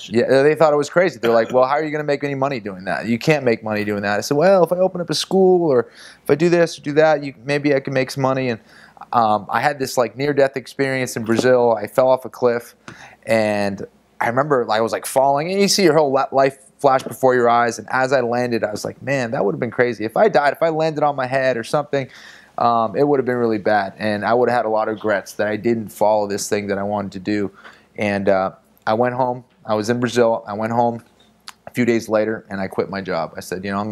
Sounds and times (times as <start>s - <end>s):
Speech: 0.0s - 33.9s.